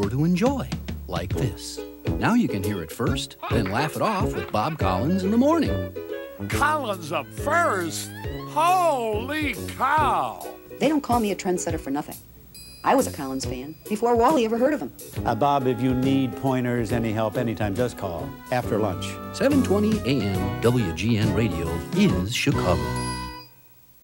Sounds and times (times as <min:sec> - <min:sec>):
Speech: 0:00.0 - 0:05.8, 0:12.9 - 0:22.9
Music: 0:00.0 - 0:24.0.